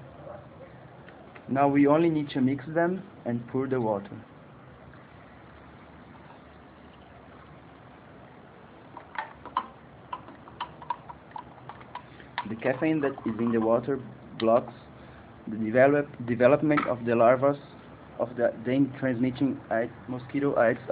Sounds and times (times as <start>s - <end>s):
Speech: 1.5s - 4.3s, 12.4s - 14.9s, 15.5s - 20.9s.